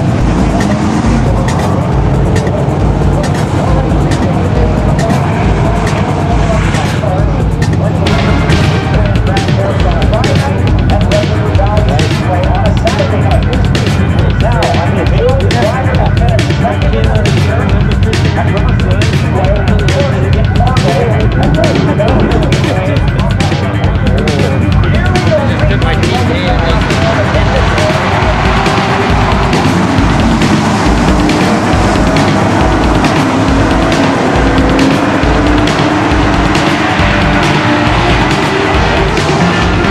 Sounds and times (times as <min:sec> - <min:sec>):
Car: 0:00.0 - 0:39.9
Speech: 0:00.3 - 0:29.4.